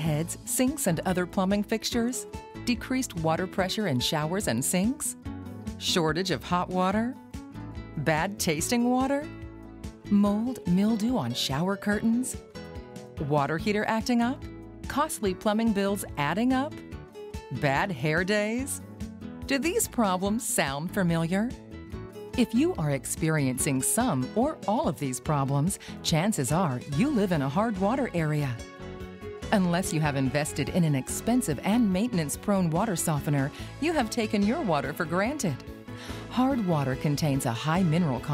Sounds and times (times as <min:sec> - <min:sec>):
Speech: 0:00.0 - 0:05.2, 0:05.8 - 0:07.2, 0:08.0 - 0:09.3, 0:10.1 - 0:12.4, 0:13.2 - 0:16.8, 0:17.5 - 0:18.8, 0:19.5 - 0:21.6, 0:22.4 - 0:28.6, 0:29.5 - 0:35.6, 0:36.3 - 0:38.3
Music: 0:00.0 - 0:38.3.